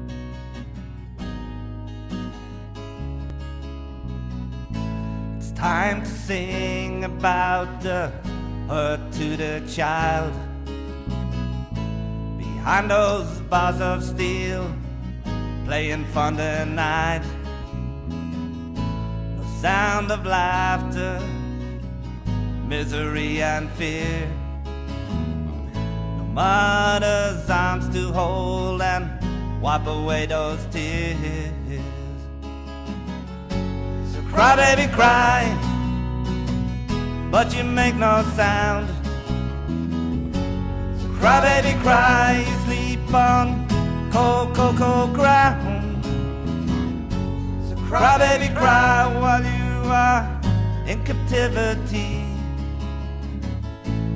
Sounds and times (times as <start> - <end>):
Music: 0.0 - 54.1.